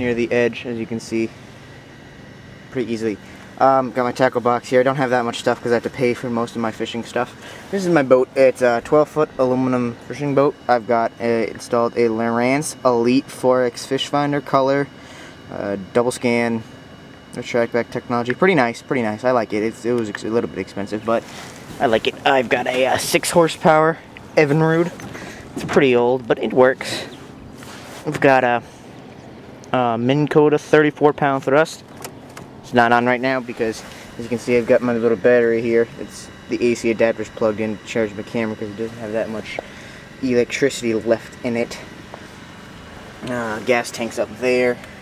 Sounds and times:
Speech: 0:00.0 - 0:01.4, 0:02.7 - 0:14.9, 0:15.5 - 0:16.7, 0:17.3 - 0:25.0, 0:25.6 - 0:27.2, 0:28.0 - 0:28.7, 0:29.7 - 0:31.8, 0:32.6 - 0:39.6, 0:40.2 - 0:41.9, 0:43.2 - 0:44.8.

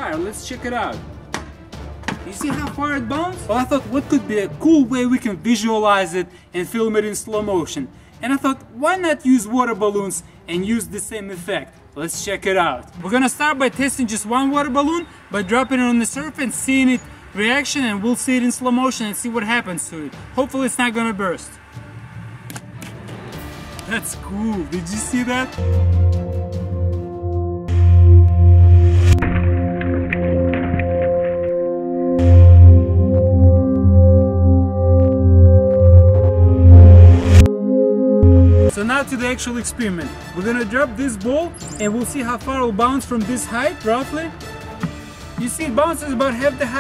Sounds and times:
Speech: 0:00.0 - 0:01.0, 0:02.3 - 0:21.6, 0:23.9 - 0:25.6, 0:38.7 - 0:44.4, 0:45.4 - 0:46.8.

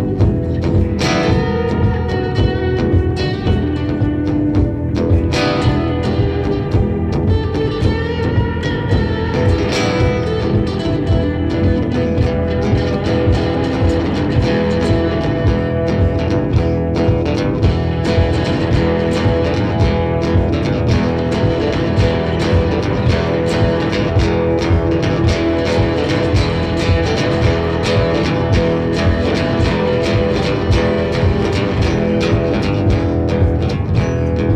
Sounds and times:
Guitar: 0:00.0 - 0:34.5.

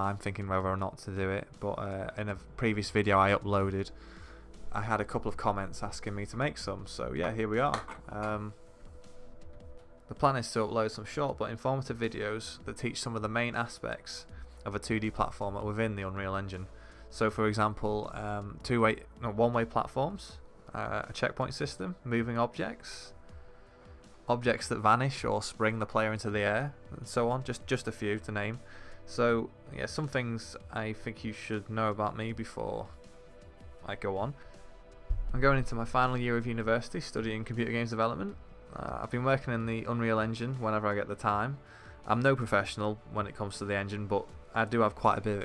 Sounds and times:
Speech: 0:00.0 - 0:03.9, 0:04.7 - 0:08.6, 0:10.1 - 0:23.2, 0:24.3 - 0:33.0, 0:33.8 - 0:34.4, 0:35.3 - 0:45.4
Music: 0:00.0 - 0:45.4.

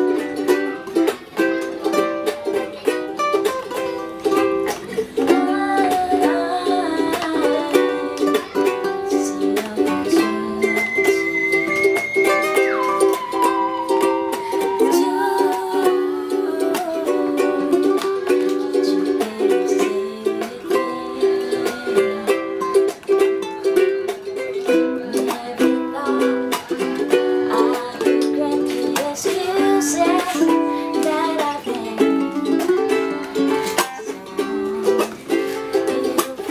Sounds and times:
Ukulele: 0:00.0 - 0:36.5.

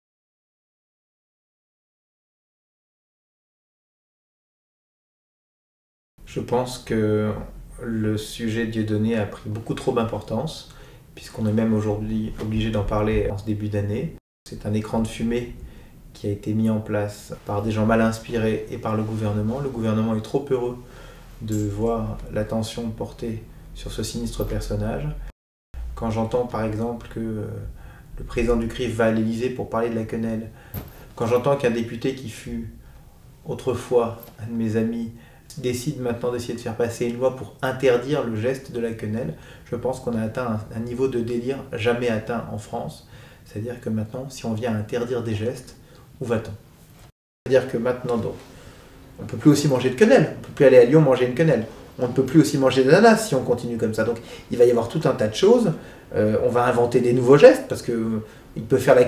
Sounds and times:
Speech: 0:06.3 - 0:15.6, 0:16.2 - 0:25.3, 0:25.9 - 0:30.6, 0:31.2 - 0:32.8, 0:33.4 - 0:46.6, 0:47.5 - 0:48.4, 0:49.2 - 0:59.0.

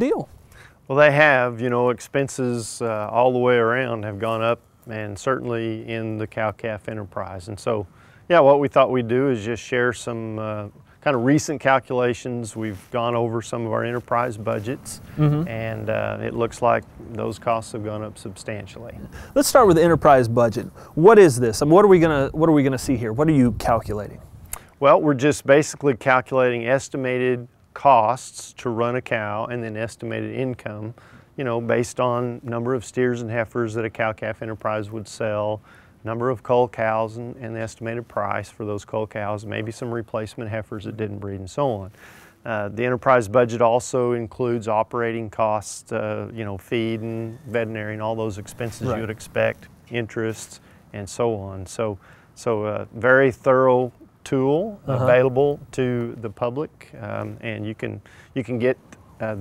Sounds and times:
Speech: 0:00.0 - 0:00.3, 0:00.9 - 0:24.2, 0:24.8 - 0:59.4.

